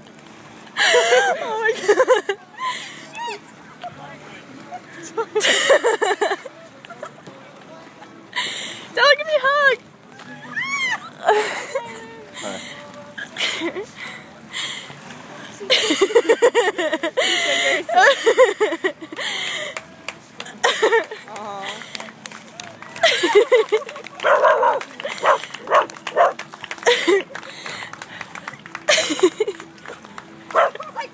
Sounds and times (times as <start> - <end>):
Outside, urban or manmade: 0.0 - 31.1.